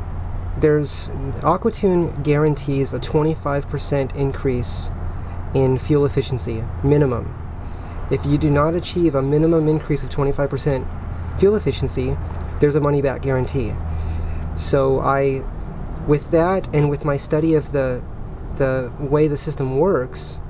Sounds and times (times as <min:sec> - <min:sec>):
Speech: 0:00.6 - 0:04.9, 0:05.5 - 0:07.4, 0:08.1 - 0:13.8, 0:14.6 - 0:18.0, 0:18.6 - 0:20.4.